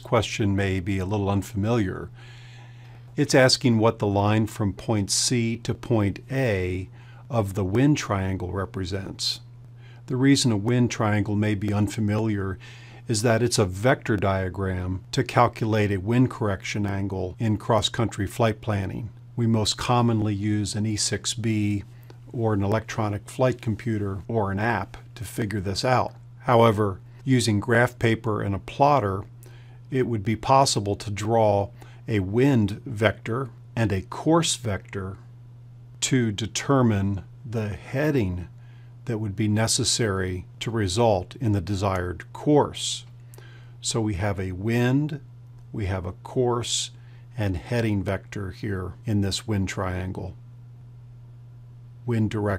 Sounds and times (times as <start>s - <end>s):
Speech: 0.0s - 2.2s, 3.2s - 9.5s, 10.1s - 35.3s, 36.0s - 43.2s, 43.8s - 50.4s, 52.0s - 52.5s.